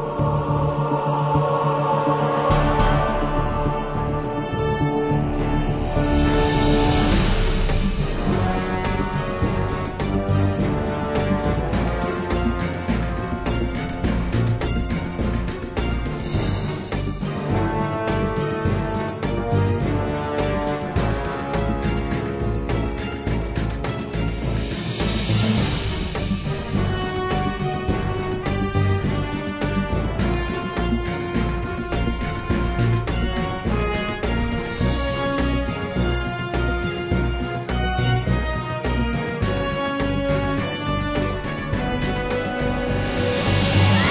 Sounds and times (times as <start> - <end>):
Music: 0.0 - 44.1.